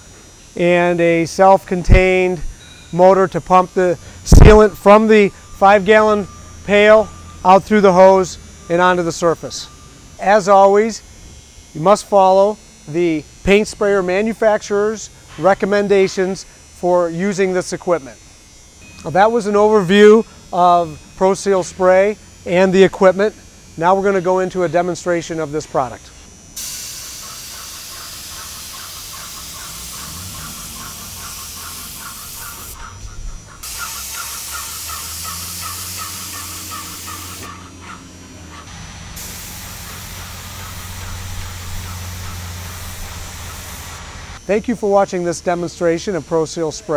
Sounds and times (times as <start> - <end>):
Spray: 26.6 - 32.9, 33.6 - 37.6, 38.7 - 44.4.